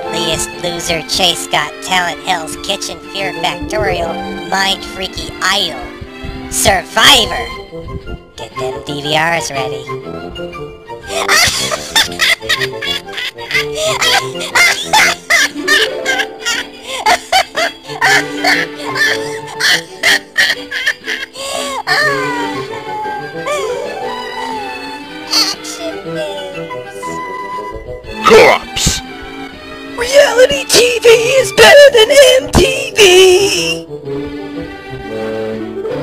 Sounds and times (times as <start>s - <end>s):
Music: 0.0s - 36.0s
Speech: 0.1s - 5.9s, 6.5s - 7.6s, 8.4s - 9.9s, 25.3s - 27.1s, 28.2s - 29.0s, 30.0s - 33.8s.